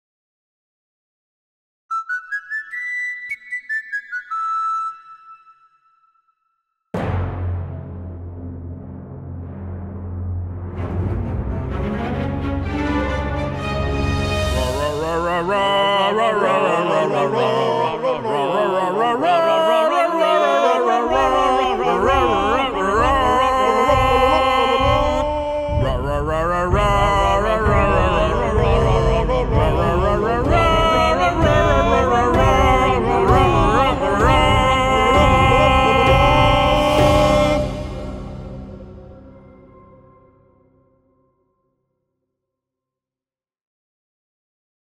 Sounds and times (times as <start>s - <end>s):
Music: 1.9s - 43.0s.